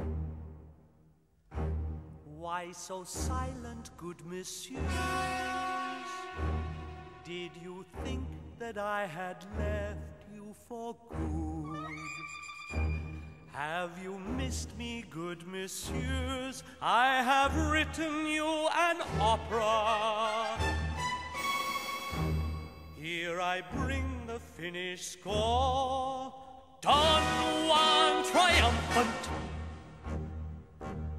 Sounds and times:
Singing: 23.0 - 29.4.

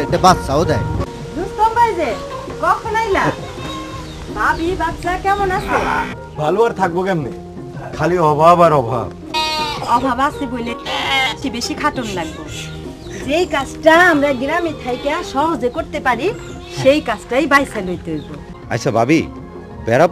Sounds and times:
Music: 0.0 - 20.1
Bleat: 3.4 - 4.1, 9.3 - 11.4, 12.0 - 12.8, 14.1 - 15.4.

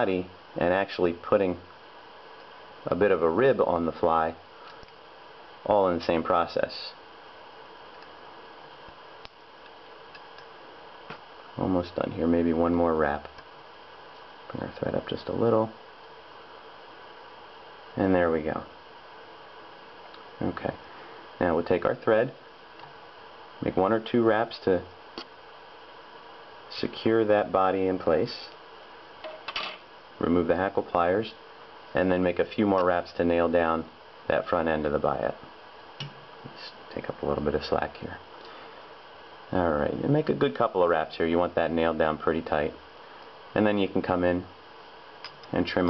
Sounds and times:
Speech: 0.0 - 1.6, 2.8 - 4.4, 5.6 - 7.0, 11.6 - 13.3, 14.5 - 15.8, 18.0 - 18.7, 20.4 - 20.8, 21.4 - 22.4, 23.6 - 24.9, 26.7 - 28.6, 30.2 - 35.4, 36.5 - 38.2, 39.5 - 42.8, 43.5 - 44.6, 45.5 - 45.8.

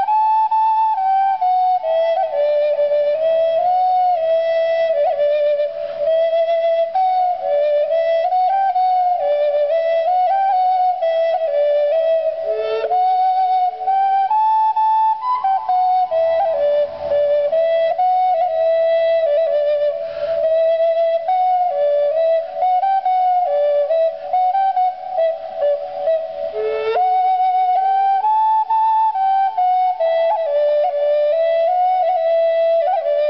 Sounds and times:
Flute: 0.0 - 33.2.

